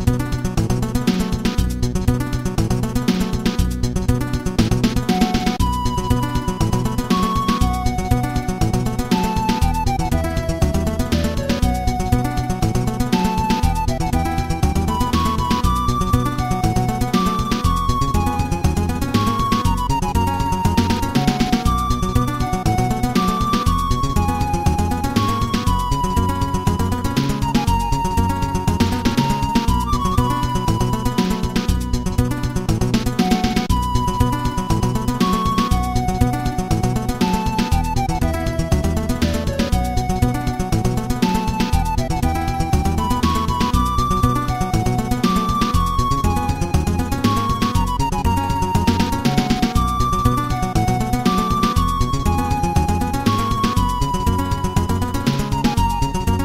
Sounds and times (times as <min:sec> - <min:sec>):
Video game music: 0:00.0 - 0:56.4.